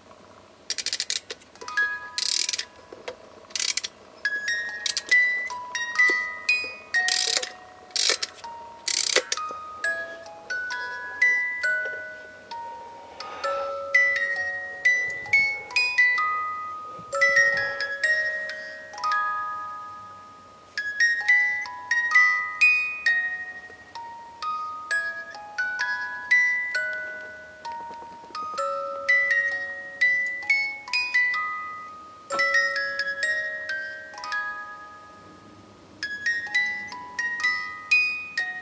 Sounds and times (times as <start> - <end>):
Music: 1.6 - 38.6.